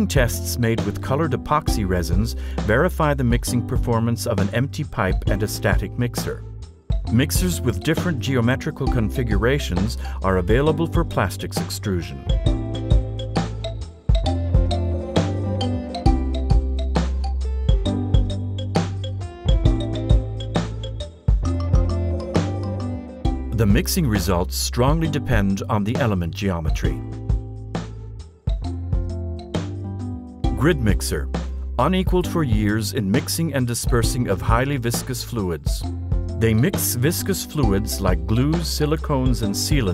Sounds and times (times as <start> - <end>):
Speech: 0.0 - 6.4, 7.1 - 12.3, 23.6 - 27.0, 30.6 - 39.9
Music: 0.0 - 39.9.